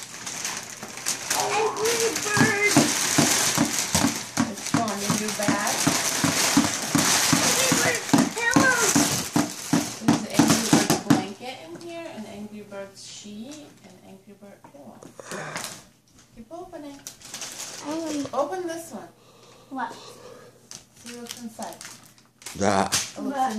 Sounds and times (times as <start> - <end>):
Crackle: 0.0 - 10.0, 16.9 - 18.6, 20.7 - 23.5
Child speech, kid speaking: 1.4 - 2.9, 7.3 - 9.1, 10.0 - 14.4, 17.8 - 19.1, 23.2 - 23.5.